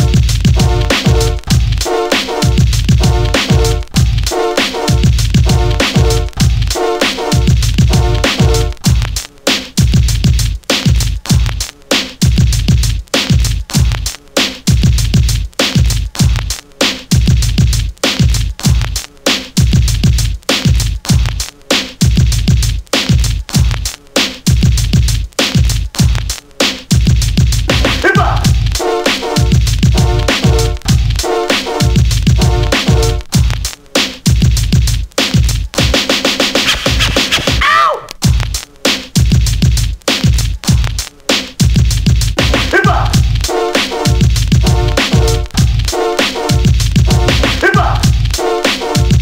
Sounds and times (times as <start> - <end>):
Music: 0.0 - 49.2.